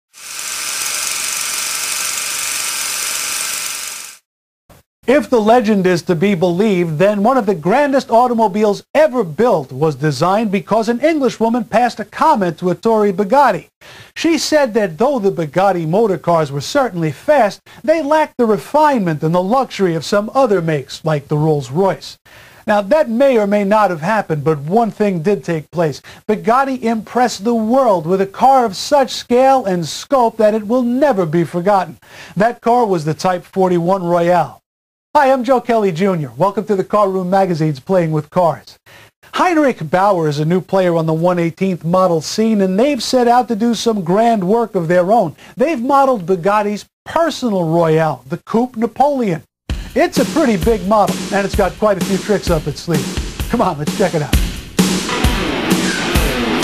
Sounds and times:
Speech: 5.1s - 34.6s, 35.2s - 54.4s.

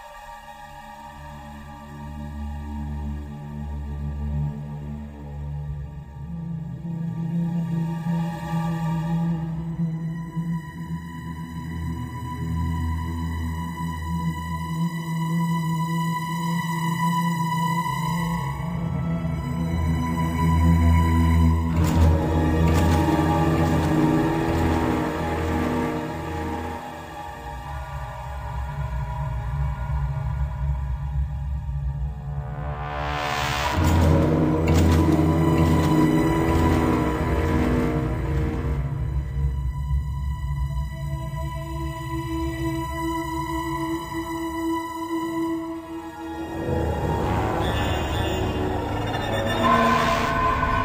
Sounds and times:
Scary music: 0.0s - 50.8s.

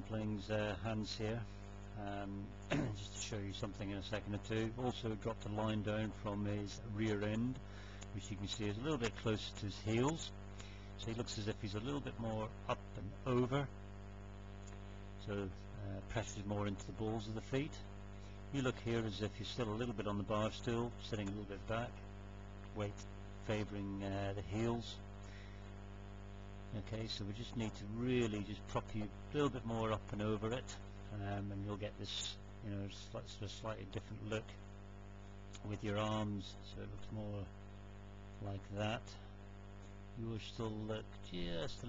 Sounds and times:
Speech: 0.0s - 10.4s, 11.0s - 13.8s, 15.2s - 17.9s, 18.5s - 22.0s, 22.6s - 25.0s, 26.7s - 34.6s, 35.6s - 37.6s, 38.4s - 39.3s, 40.2s - 41.8s.

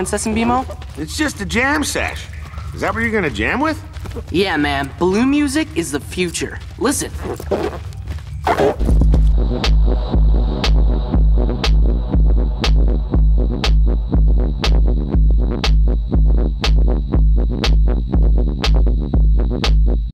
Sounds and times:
Music: 7.6s - 20.1s.

